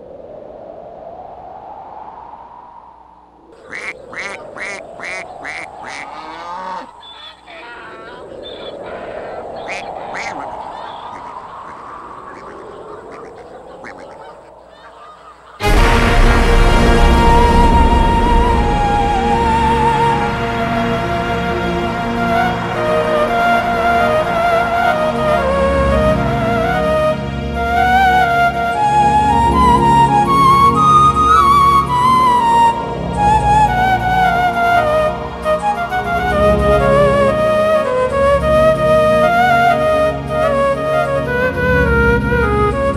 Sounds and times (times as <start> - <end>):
Music: 15.6 - 42.9.